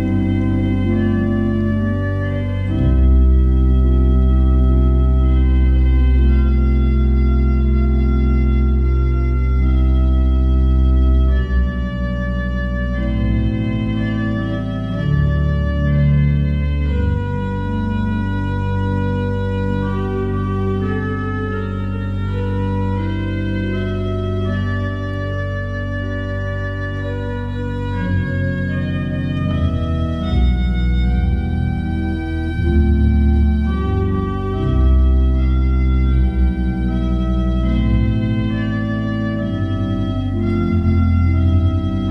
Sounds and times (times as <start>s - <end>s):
Organ: 0.0s - 42.1s.